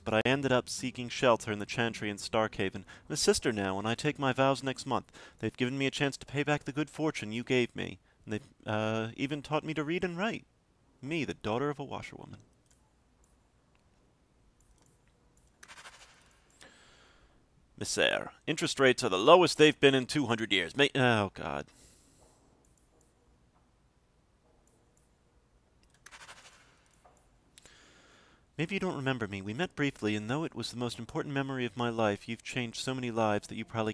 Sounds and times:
Speech: 0.0 - 12.4, 17.8 - 21.7, 28.6 - 33.9
Inside, small room: 0.0 - 33.9
Clicking: 12.4 - 13.9.

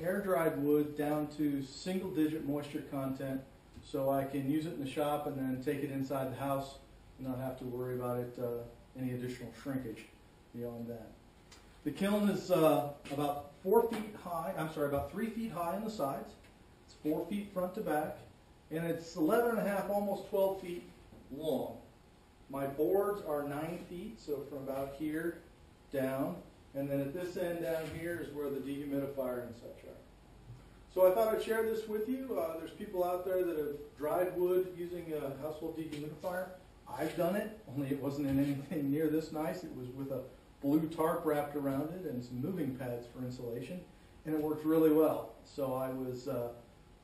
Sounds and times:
Speech: 0.0 - 11.2, 11.8 - 21.9, 22.5 - 30.1, 30.9 - 46.7.

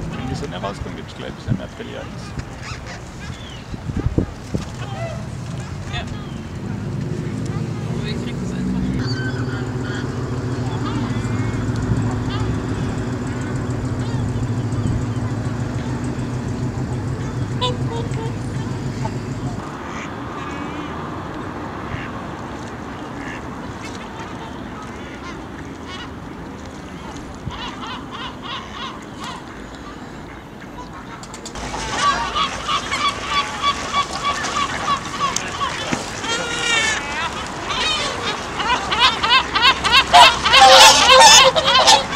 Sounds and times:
Duck: 31.9 - 42.1.

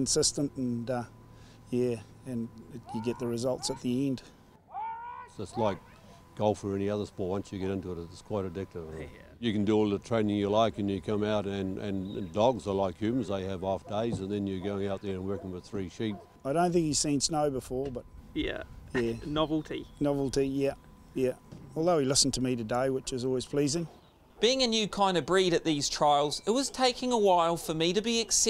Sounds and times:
Speech: 1.7 - 4.2, 6.4 - 28.4.

